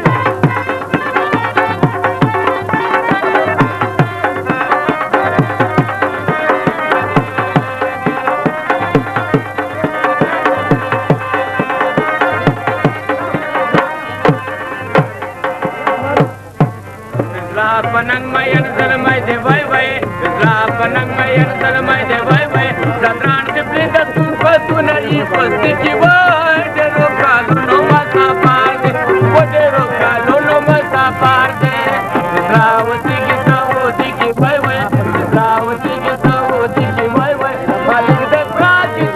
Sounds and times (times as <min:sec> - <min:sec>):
Middle Eastern music: 0:00.0 - 0:39.1.